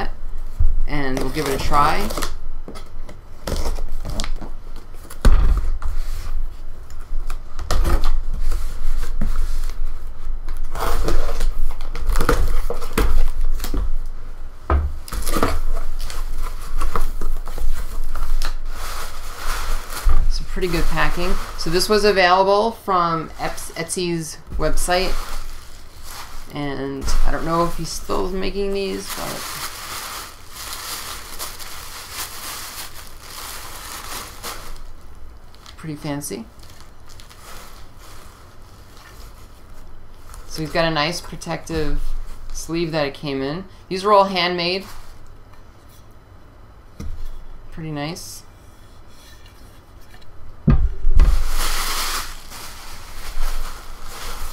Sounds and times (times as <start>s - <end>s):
Speech: 0.9s - 2.2s, 20.3s - 25.2s, 26.5s - 29.4s, 35.8s - 36.5s, 40.5s - 44.9s, 47.7s - 48.5s.